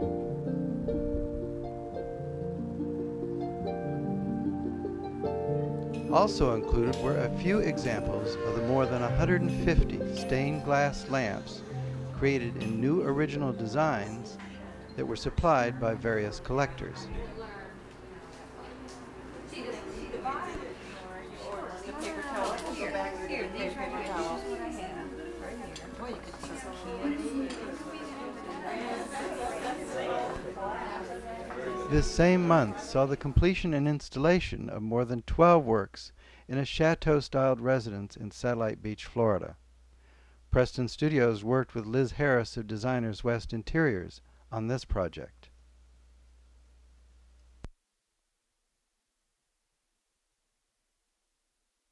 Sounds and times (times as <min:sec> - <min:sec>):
Music: 0:00.0 - 0:18.1, 0:21.1 - 0:33.1
Speech: 0:06.1 - 0:18.9, 0:19.5 - 0:39.6, 0:40.5 - 0:45.5.